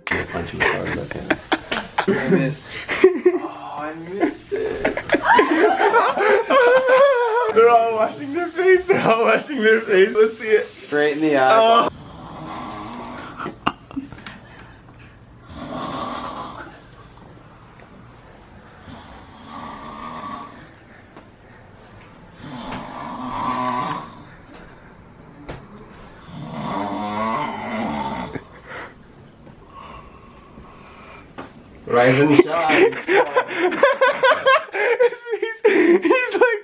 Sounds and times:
Inside, small room: 0:00.0 - 0:36.6.

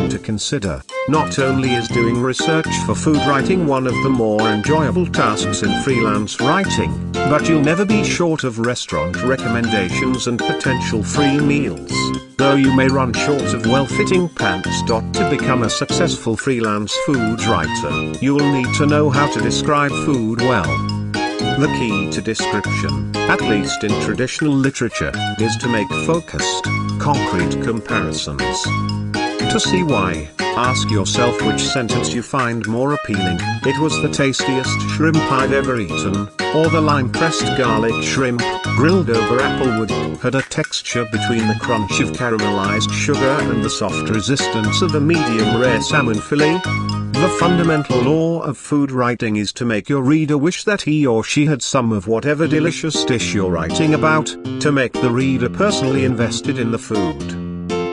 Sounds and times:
Speech: 0:00.0 - 0:20.8, 0:21.4 - 0:28.7, 0:29.4 - 0:46.6, 0:47.2 - 0:57.4
Music: 0:00.0 - 0:49.2, 0:51.8 - 0:57.9.

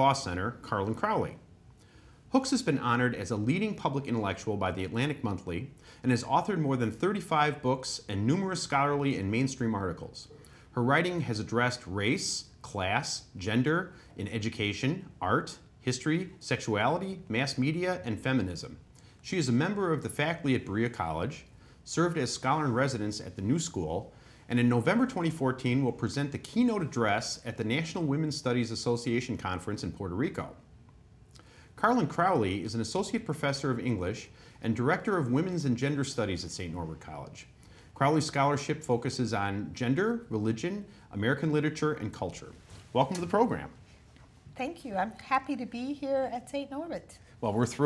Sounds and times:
Speech: 0:00.0 - 0:01.5, 0:02.3 - 0:30.6, 0:31.8 - 0:43.8, 0:44.6 - 0:47.8.

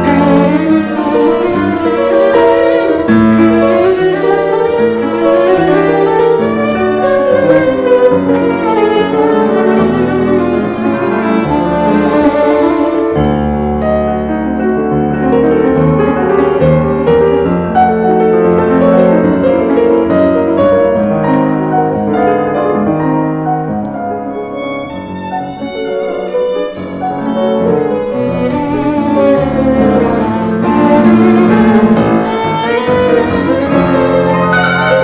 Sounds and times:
Violin, fiddle: 0:00.0 - 0:13.6, 0:23.8 - 0:35.0.

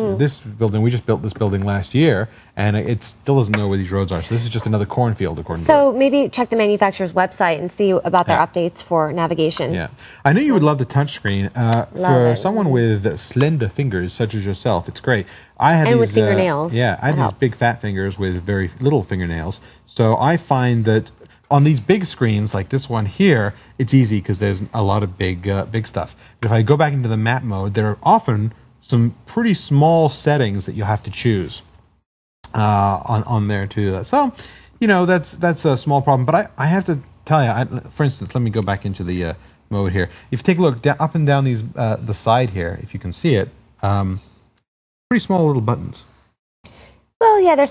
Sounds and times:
Speech: 0:00.0 - 0:31.6, 0:32.5 - 0:44.2, 0:45.1 - 0:46.1.

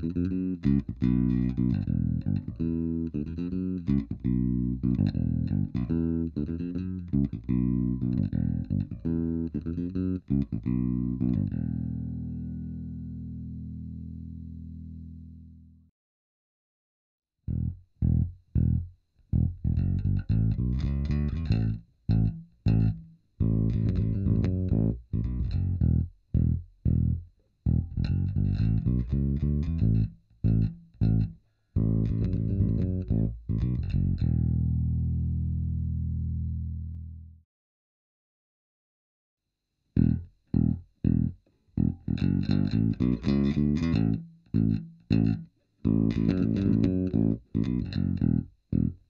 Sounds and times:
Music: 0:00.0 - 0:15.9, 0:17.5 - 0:37.4, 0:40.0 - 0:49.0.

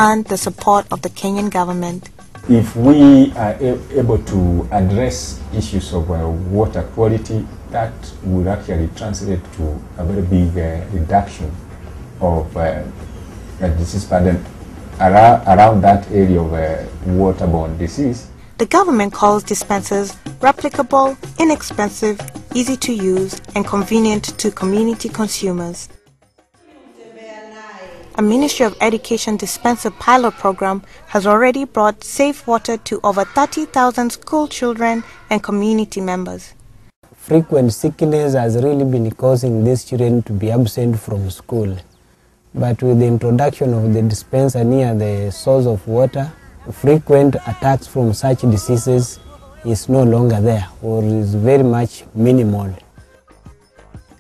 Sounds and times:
Female speech, woman speaking: 0:00.0 - 0:02.1, 0:18.6 - 0:25.9, 0:26.7 - 0:36.6
Music: 0:00.0 - 0:06.0, 0:08.6 - 0:27.2, 0:51.0 - 0:54.2.

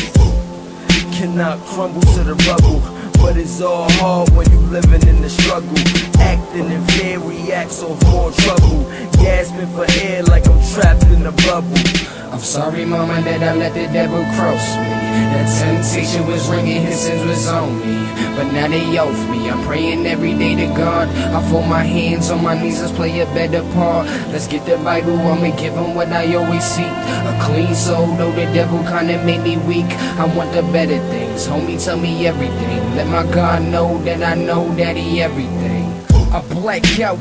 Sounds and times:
Music: 0:00.0 - 0:37.2.

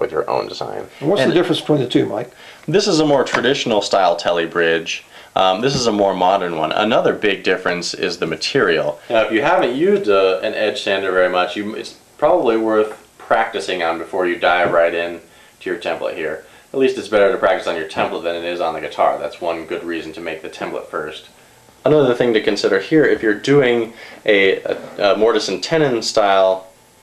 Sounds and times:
Speech: 0:00.0 - 0:26.7.

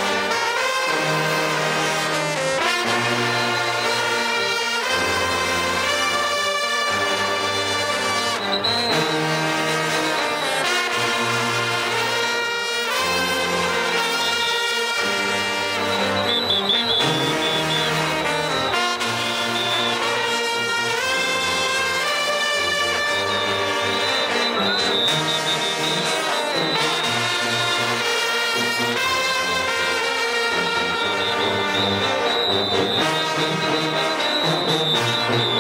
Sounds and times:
Music: 0:00.0 - 0:35.6.

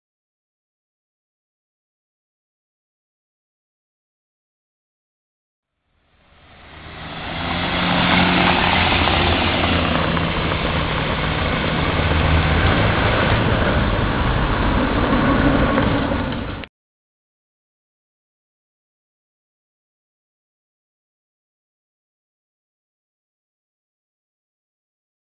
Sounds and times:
Motor vehicle (road): 0:05.7 - 0:16.7.

